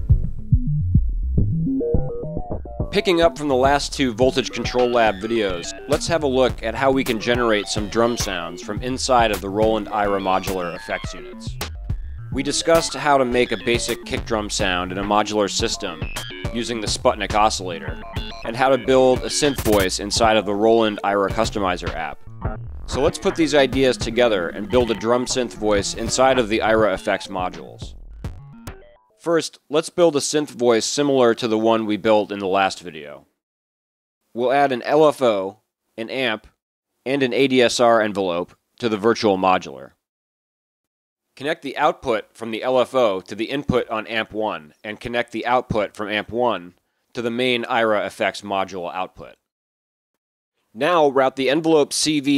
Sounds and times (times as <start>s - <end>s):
Speech: 3.0s - 11.5s, 12.4s - 22.2s, 22.9s - 27.9s, 29.2s - 33.3s, 34.4s - 36.5s, 37.1s - 40.0s, 41.4s - 49.4s, 50.8s - 52.3s.